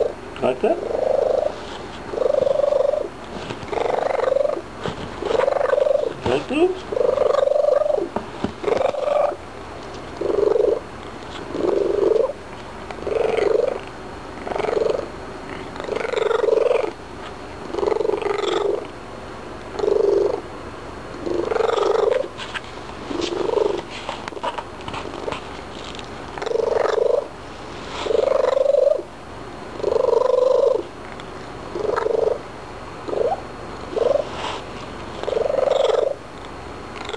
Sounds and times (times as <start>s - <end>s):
Purr: 0.0s - 4.6s, 5.2s - 9.4s, 10.2s - 10.8s, 11.4s - 17.0s, 17.6s - 18.9s, 19.7s - 20.4s, 21.2s - 22.3s, 23.1s - 25.4s, 26.3s - 27.3s, 28.0s - 29.1s, 29.8s - 32.4s, 33.1s - 34.5s, 35.2s - 36.2s, 37.0s - 37.1s.